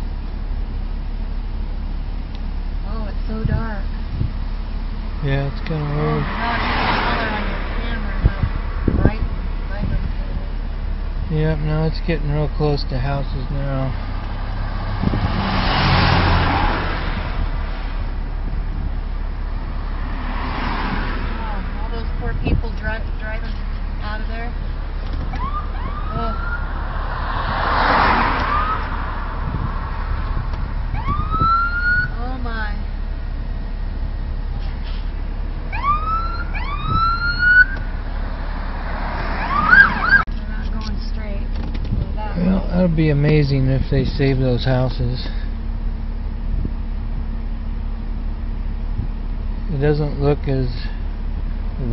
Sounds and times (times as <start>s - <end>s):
Police car (siren): 25.3s - 26.8s, 28.4s - 28.9s, 30.9s - 32.2s, 35.7s - 37.8s, 39.3s - 40.3s.